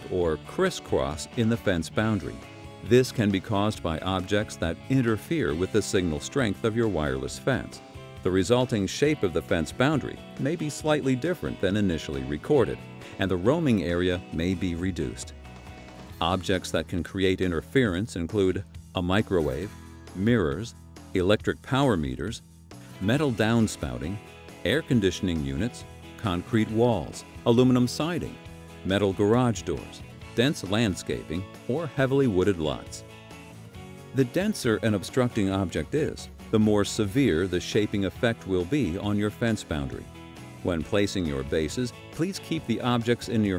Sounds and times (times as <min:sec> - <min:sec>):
Speech: 0:00.0 - 0:15.3, 0:16.2 - 0:22.4, 0:23.0 - 0:33.0, 0:34.2 - 0:43.5
Music: 0:00.0 - 0:43.5.